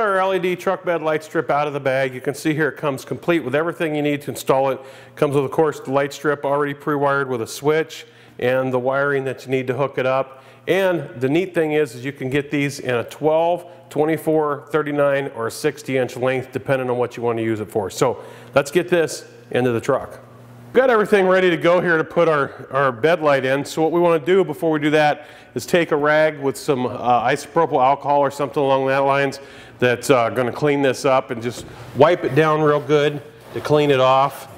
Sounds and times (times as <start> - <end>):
Speech: 0.0 - 34.5.